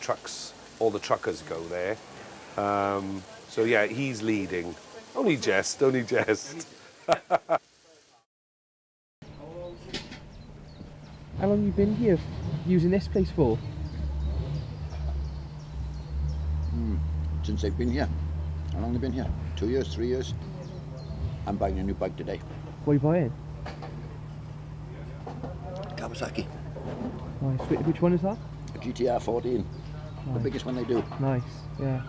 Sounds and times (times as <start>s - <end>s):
Outside, urban or manmade: 0.0s - 8.3s, 9.2s - 32.0s
Speech: 2.6s - 6.7s, 11.4s - 14.2s, 18.8s - 23.4s, 27.4s - 32.0s.